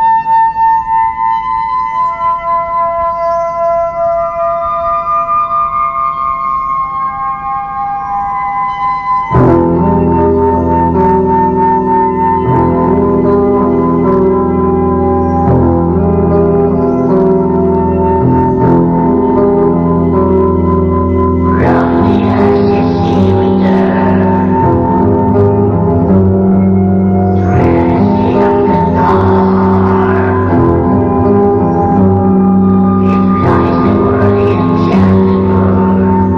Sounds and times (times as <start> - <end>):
Music: 0.0 - 36.3.